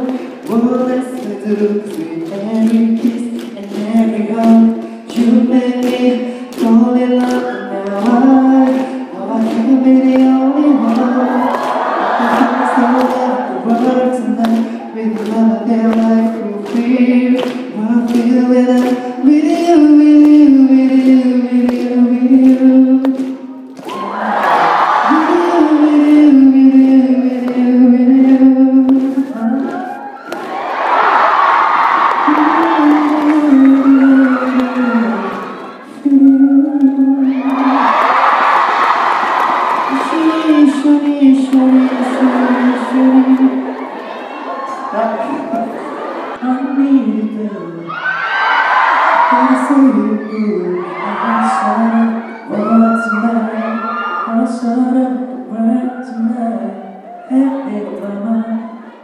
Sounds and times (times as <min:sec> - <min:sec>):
Female singing: 0:00.0 - 0:30.1, 0:32.1 - 0:38.1, 0:39.9 - 0:43.8, 0:46.4 - 0:48.0, 0:49.2 - 0:59.0.